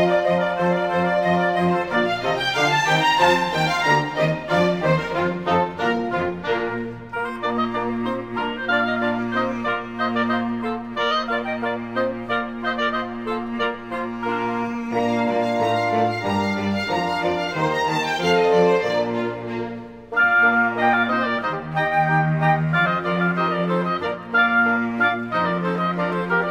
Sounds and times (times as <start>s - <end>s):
Brass instrument: 0.0s - 26.5s.